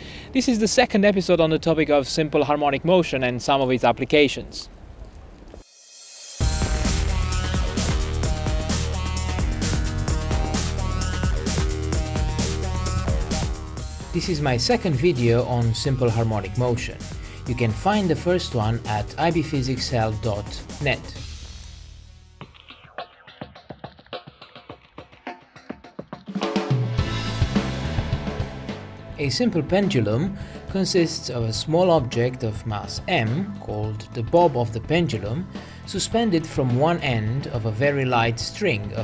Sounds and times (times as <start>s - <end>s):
Speech: 0.4s - 4.7s, 14.2s - 21.2s, 29.2s - 39.0s
Music: 5.6s - 39.0s.